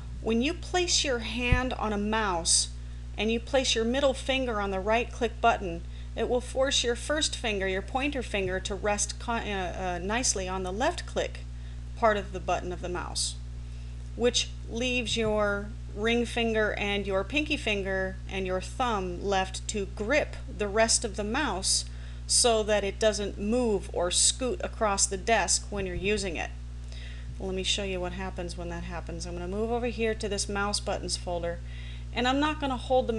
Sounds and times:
Speech: 0.2s - 11.4s, 12.0s - 13.4s, 14.2s - 26.6s, 27.4s - 31.6s, 32.2s - 33.1s.

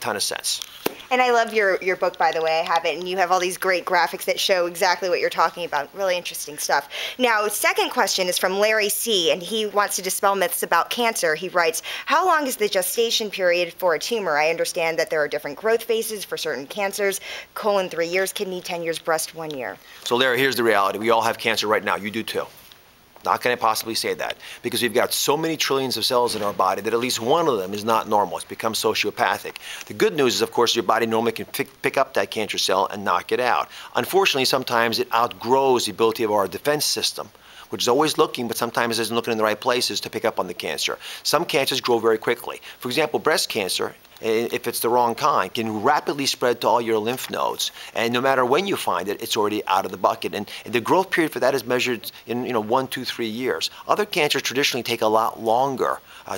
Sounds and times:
Speech: 0.0s - 22.5s, 23.3s - 56.3s.

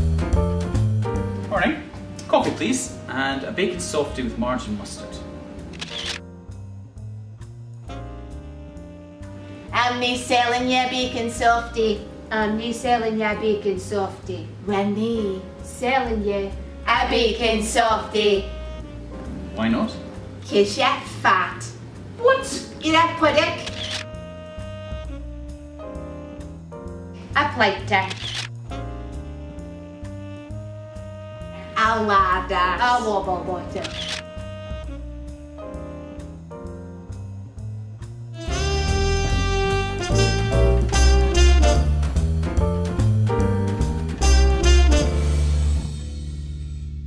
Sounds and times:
Music: 0.0s - 47.0s
Speech: 31.8s - 33.9s.

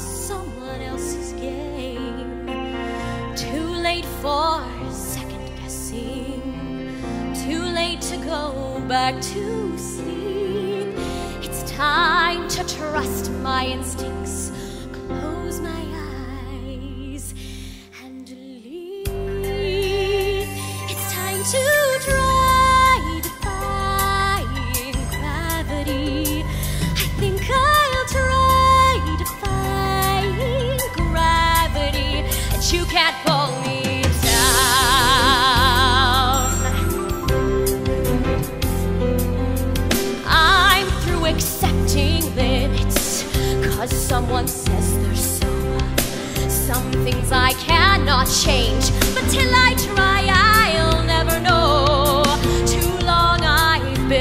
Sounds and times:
Music: 0.0s - 54.2s.

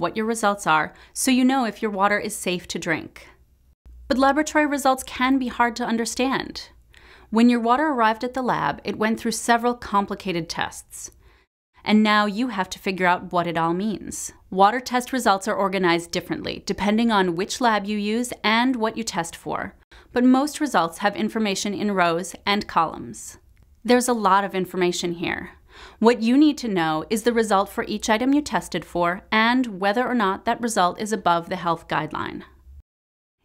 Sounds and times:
Speech: 0.0s - 3.4s, 4.1s - 11.2s, 11.9s - 32.5s.

